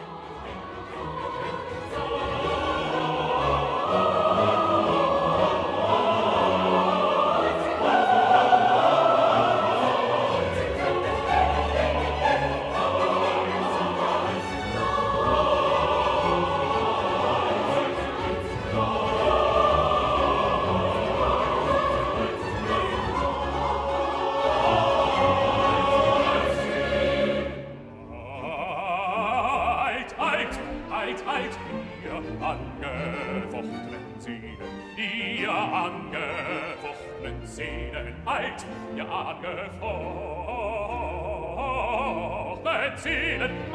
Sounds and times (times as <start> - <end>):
Music: 0.0 - 43.7.